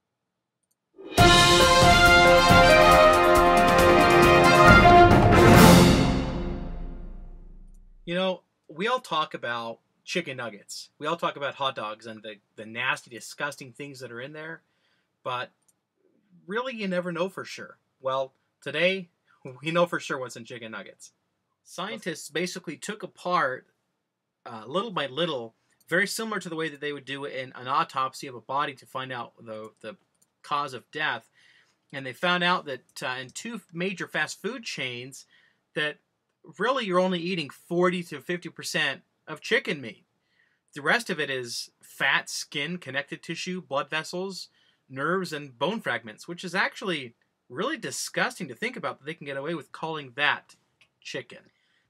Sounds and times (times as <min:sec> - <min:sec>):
Speech: 0:08.1 - 0:14.6, 0:15.3 - 0:15.6, 0:16.4 - 0:23.7, 0:24.5 - 0:31.3, 0:31.9 - 0:40.0, 0:40.8 - 0:51.5.